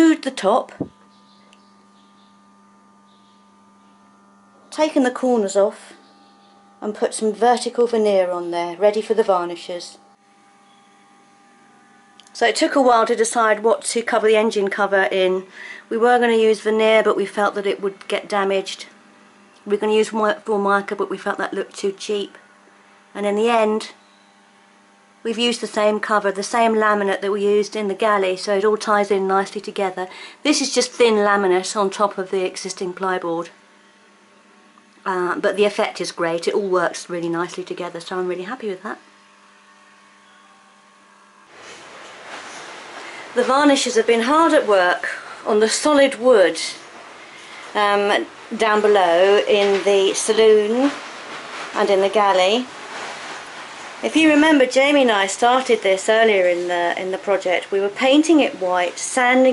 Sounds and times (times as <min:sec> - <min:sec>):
Mains hum: 0:00.0 - 0:59.5.